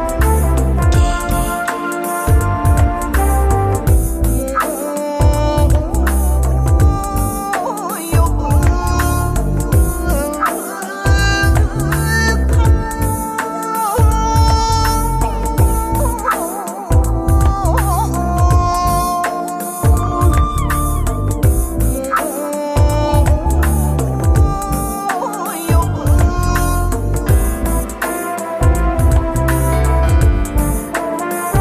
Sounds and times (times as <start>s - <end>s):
Middle Eastern music: 0.0s - 31.6s.